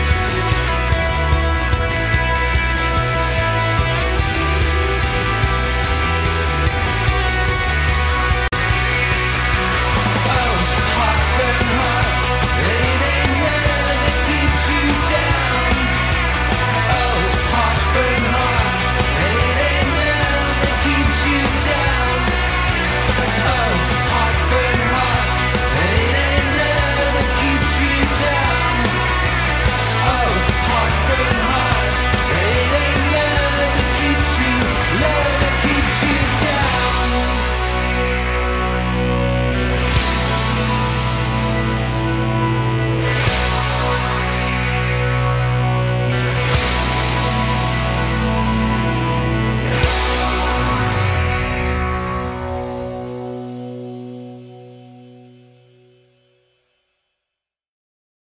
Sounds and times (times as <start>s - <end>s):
Progressive rock: 0.0s - 56.6s.